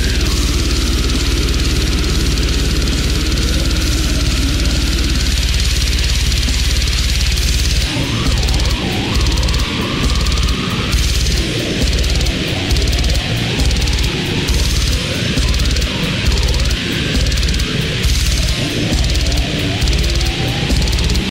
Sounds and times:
Music: 0:00.0 - 0:21.3.

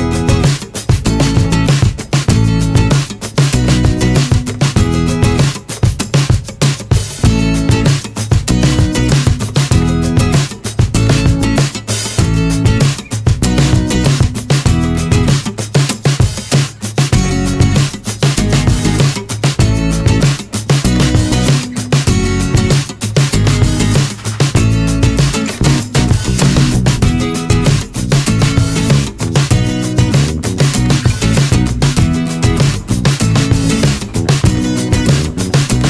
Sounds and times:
Music: 0:00.0 - 0:35.9.

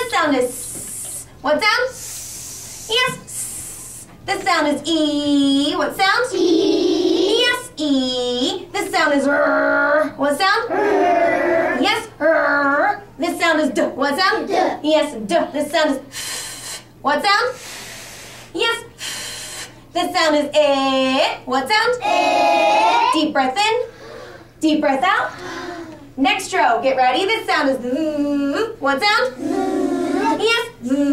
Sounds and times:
Speech: 0:02.9 - 0:03.4, 0:04.3 - 0:10.8, 0:20.0 - 0:22.2, 0:26.2 - 0:31.1.

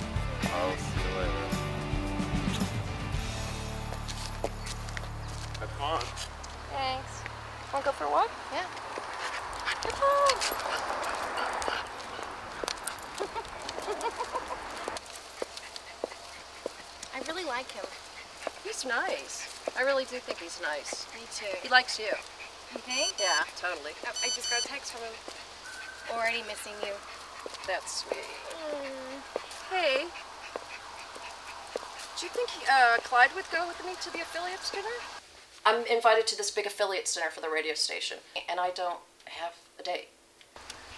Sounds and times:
Female speech, woman speaking: 0:06.7 - 0:07.2, 0:07.8 - 0:08.7, 0:17.1 - 0:17.9, 0:18.6 - 0:22.2, 0:22.8 - 0:25.2, 0:26.1 - 0:27.0, 0:27.6 - 0:30.1, 0:32.2 - 0:35.0, 0:35.6 - 0:40.1.

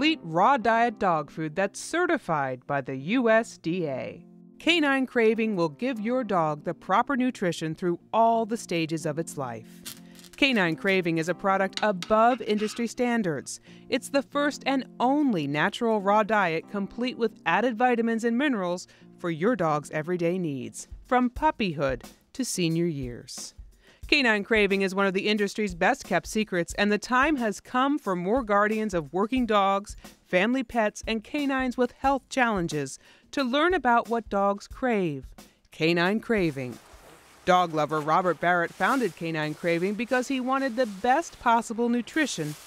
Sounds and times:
Speech: 0:00.0 - 0:09.6, 0:10.4 - 0:23.5, 0:24.1 - 0:36.8, 0:37.5 - 0:42.6
Music: 0:00.0 - 0:36.9, 0:37.5 - 0:42.6.

